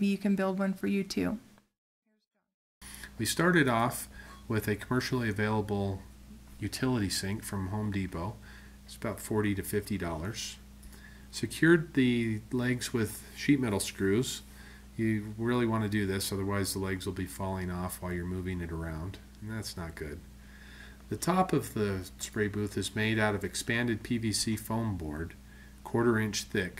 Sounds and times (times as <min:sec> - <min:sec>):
Speech: 0:00.0 - 0:01.4, 0:03.2 - 0:10.6, 0:11.3 - 0:20.3, 0:21.1 - 0:26.7.